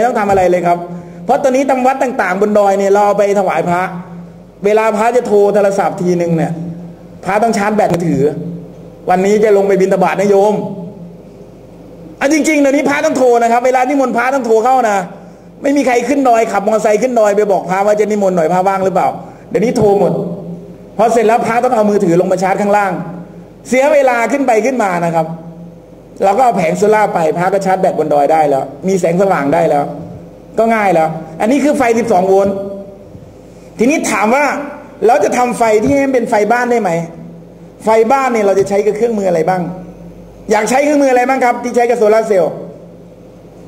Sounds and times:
Narration, monologue: 0.0s - 43.6s.

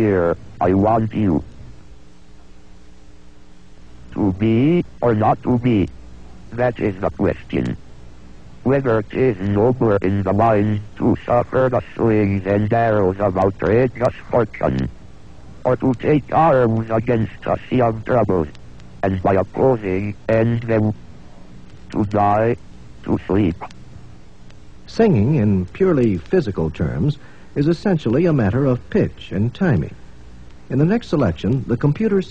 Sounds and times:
Speech synthesizer: 0.0s - 1.4s, 4.2s - 5.9s, 6.6s - 7.8s, 8.7s - 14.9s, 15.7s - 21.0s, 22.0s - 23.7s.

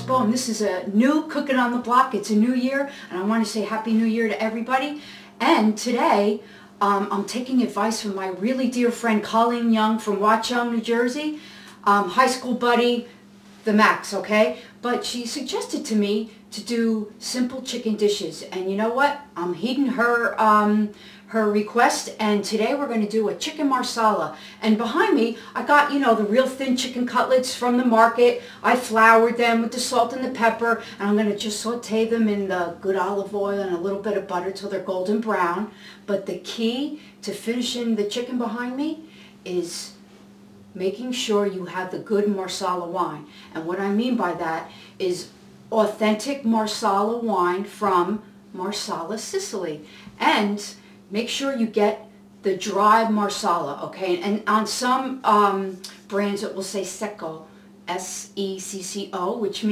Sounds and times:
Speech: 0.0s - 40.0s, 40.8s - 59.7s.

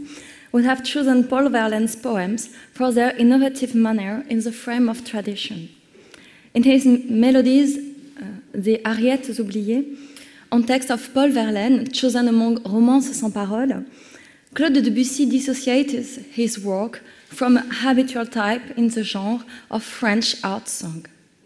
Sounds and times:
Speech: 0.6s - 5.7s, 6.6s - 9.9s, 10.5s - 13.9s, 14.6s - 21.1s.

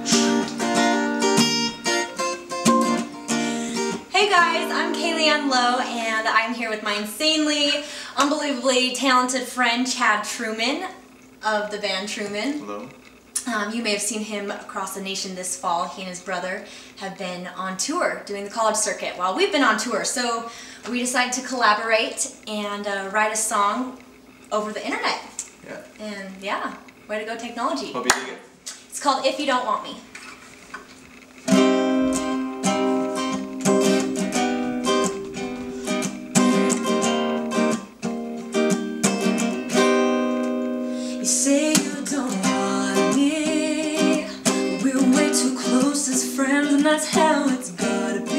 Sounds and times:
Guitar: 0.0s - 48.3s.

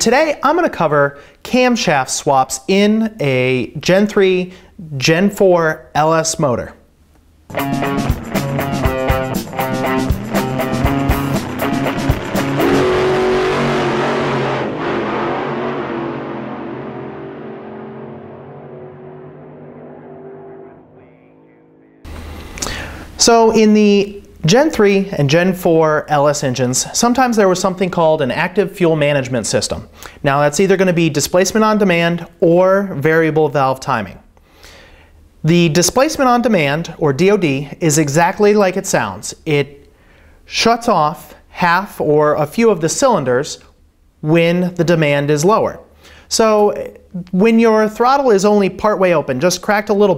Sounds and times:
Speech: 0.0s - 6.8s, 20.7s - 22.1s, 23.2s - 34.3s, 35.4s - 39.8s, 40.5s - 50.1s.

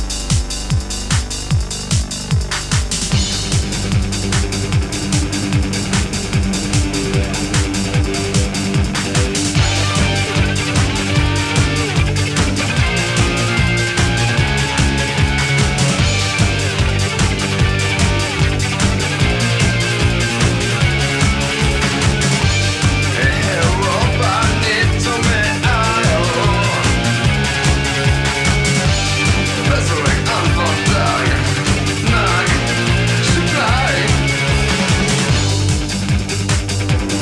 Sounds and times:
Music: 0.0s - 37.2s.

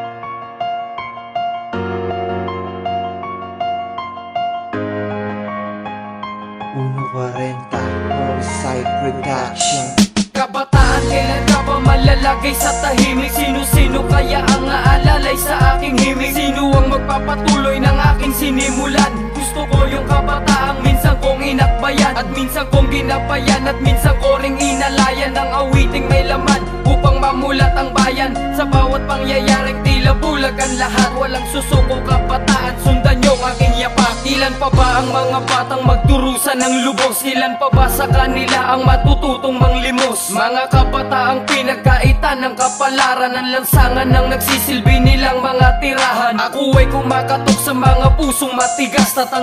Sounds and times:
Music: 0.0s - 49.4s.

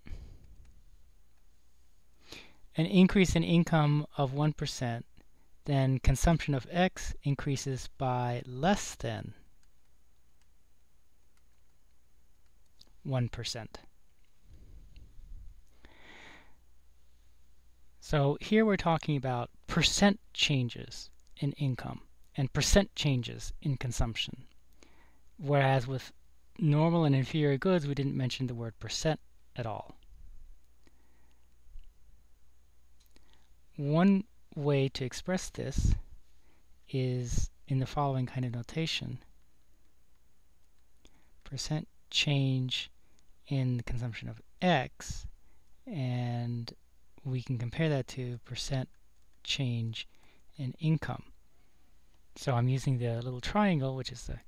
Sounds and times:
Inside, small room: 0.0s - 54.4s
Speech: 2.7s - 9.5s, 13.0s - 13.9s, 18.0s - 24.5s, 25.4s - 30.0s, 33.8s - 36.1s, 36.9s - 39.3s, 41.4s - 51.4s, 52.4s - 54.4s.

